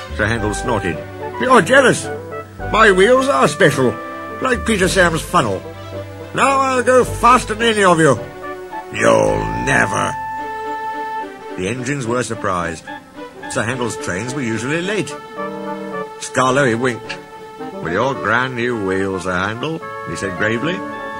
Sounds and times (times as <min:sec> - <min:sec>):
Music: 0:00.0 - 0:21.1
Speech: 0:00.1 - 0:02.1, 0:02.7 - 0:05.6, 0:06.3 - 0:08.2, 0:08.9 - 0:10.2, 0:11.6 - 0:12.9, 0:13.5 - 0:15.2, 0:16.2 - 0:17.2, 0:17.8 - 0:20.9.